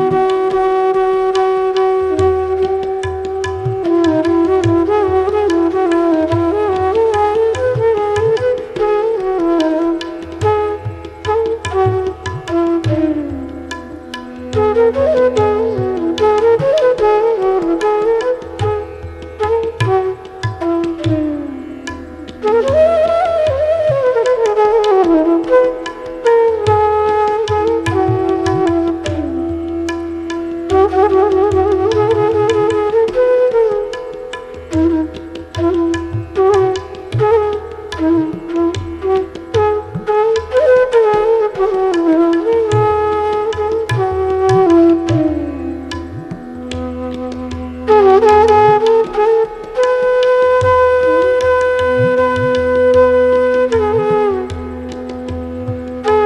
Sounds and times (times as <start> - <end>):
Carnatic music: 0.0 - 56.2
Flute: 0.0 - 56.2.